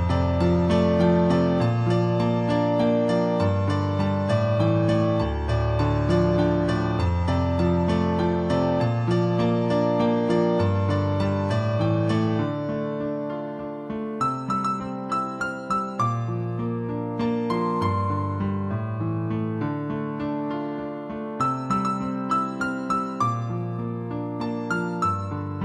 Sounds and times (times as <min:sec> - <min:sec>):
Music: 0:00.0 - 0:25.6.